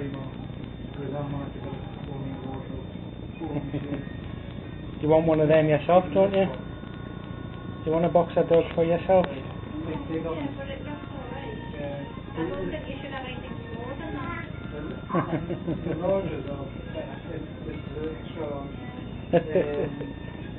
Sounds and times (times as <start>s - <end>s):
Music: 0.9s - 20.5s.